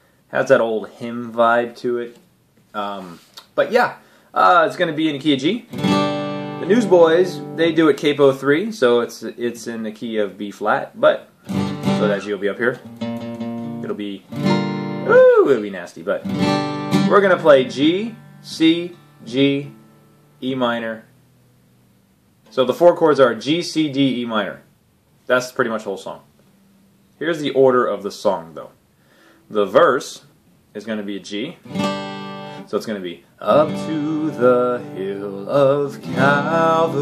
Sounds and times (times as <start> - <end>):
Speech: 0.3 - 5.7, 6.6 - 11.3, 12.0 - 12.8, 13.8 - 14.3, 15.1 - 16.3, 17.1 - 19.8, 20.4 - 21.1, 22.5 - 24.7, 25.3 - 26.3, 27.2 - 28.8, 29.5 - 31.6, 32.7 - 36.0
Strum: 5.6 - 8.5, 11.5 - 22.8, 31.6 - 37.0.